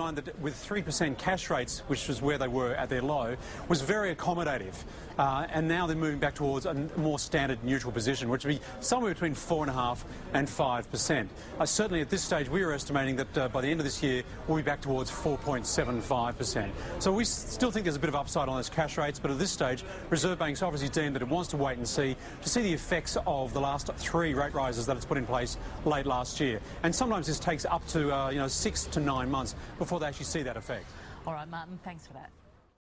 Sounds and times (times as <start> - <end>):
Speech: 0.0 - 32.3.